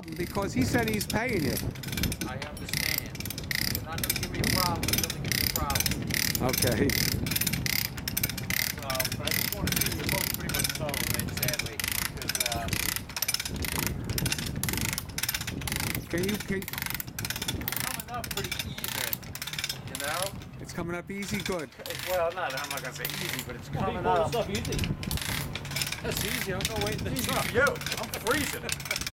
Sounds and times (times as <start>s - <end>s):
Wind noise (microphone): 0.0s - 21.4s, 23.6s - 29.1s.